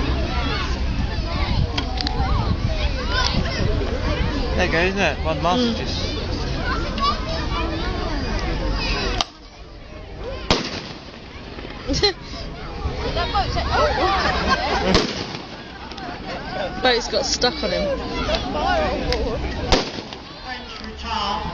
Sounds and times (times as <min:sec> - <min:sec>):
Outside, rural or natural: 0:00.0 - 0:21.5
Fireworks: 0:10.5 - 0:11.3, 0:14.9 - 0:15.7, 0:19.7 - 0:20.4.